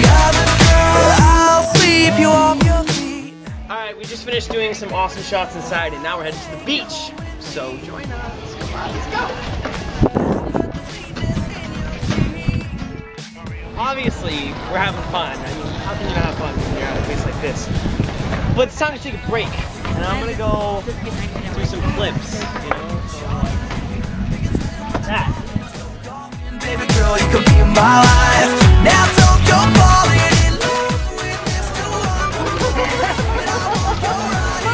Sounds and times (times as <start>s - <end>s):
Music: 0.0s - 34.7s
Speech: 3.7s - 9.4s, 13.8s - 17.7s.